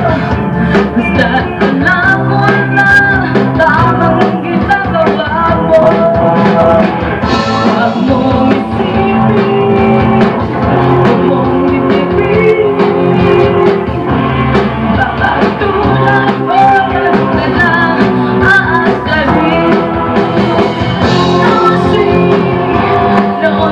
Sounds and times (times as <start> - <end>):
Female singing: 0.0 - 6.9, 7.5 - 13.9, 14.9 - 20.0, 21.2 - 23.7
Music: 0.0 - 23.7.